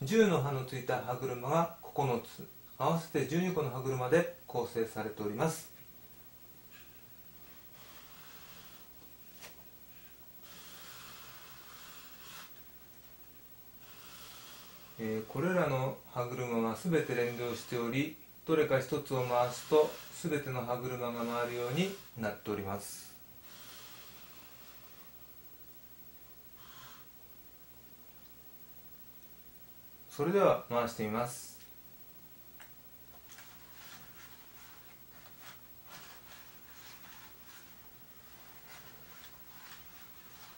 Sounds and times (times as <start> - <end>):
Speech: 0.0 - 5.8, 15.0 - 23.2, 30.1 - 31.7.